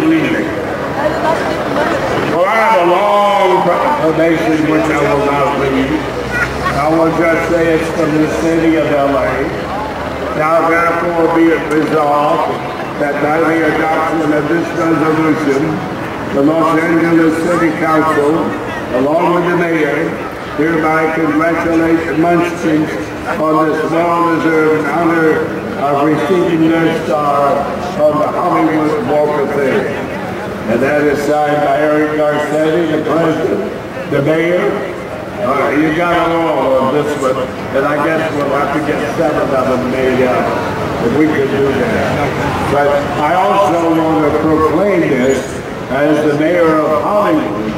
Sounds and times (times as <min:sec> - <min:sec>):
Speech: 0:00.0 - 0:47.7.